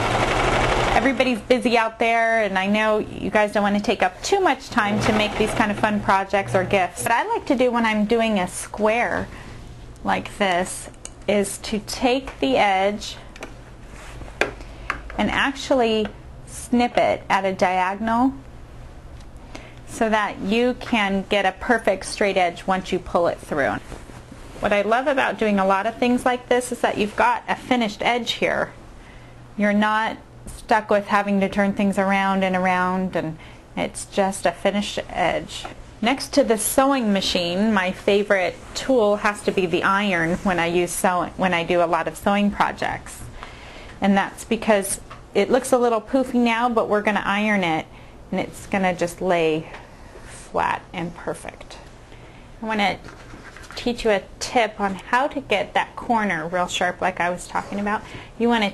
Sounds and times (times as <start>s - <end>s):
Speech: 1.0s - 9.3s, 10.0s - 13.2s, 15.2s - 18.4s, 19.9s - 23.8s, 24.6s - 28.7s, 29.6s - 43.3s, 44.0s - 49.8s, 50.4s - 51.8s, 52.6s - 53.1s, 53.8s - 58.7s.